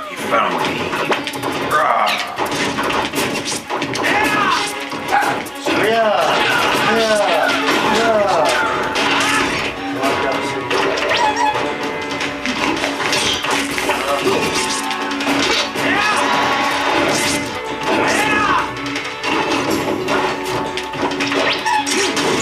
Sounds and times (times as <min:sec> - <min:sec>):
Music: 0:00.0 - 0:22.4
Smash, crash: 0:00.2 - 0:22.4.